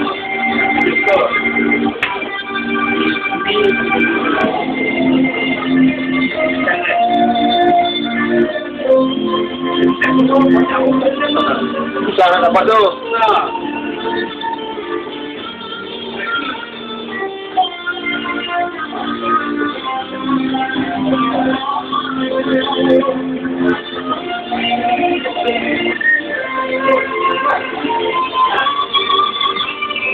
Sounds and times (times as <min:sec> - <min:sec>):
Speech: 0:10.1 - 0:13.5.